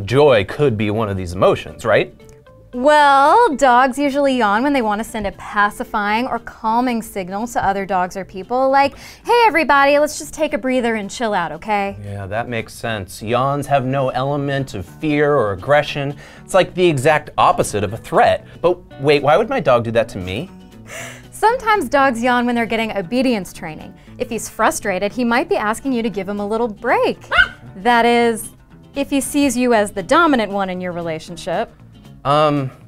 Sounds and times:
Dog: 0:27.3 - 0:27.7.

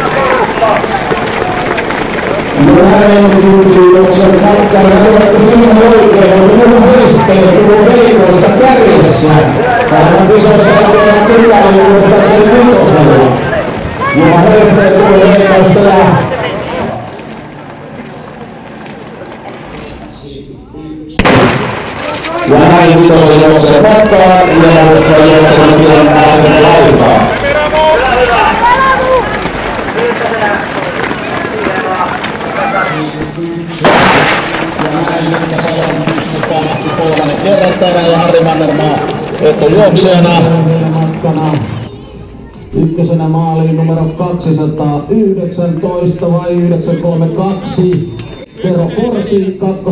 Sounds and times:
Run: 0:00.0 - 0:20.3, 0:21.7 - 0:49.9
Outside, urban or manmade: 0:00.0 - 0:49.9.

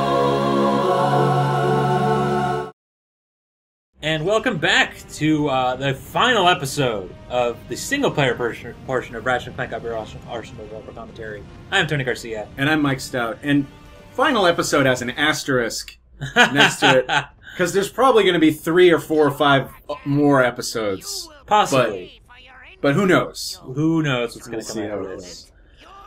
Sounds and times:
Music: 0:00.0 - 0:02.7, 0:04.0 - 0:15.8
Speech: 0:04.0 - 0:26.0.

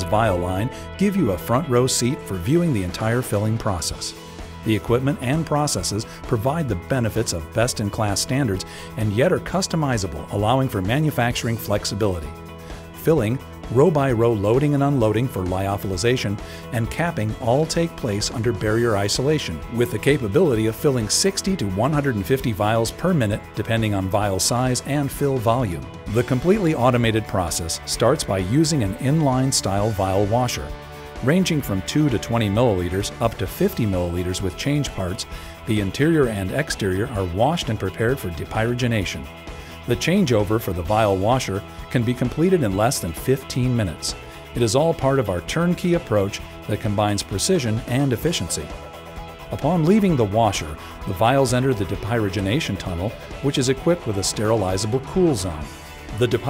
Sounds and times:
Speech: 0:00.0 - 0:12.4, 0:13.0 - 0:48.7, 0:49.5 - 0:56.5
Music: 0:00.0 - 0:56.5.

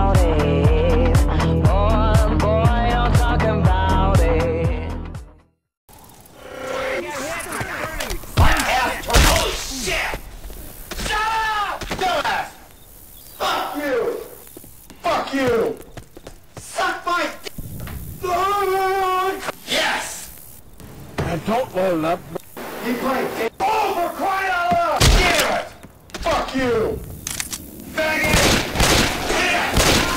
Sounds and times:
Speech: 0:15.0 - 0:15.8, 0:21.2 - 0:27.0.

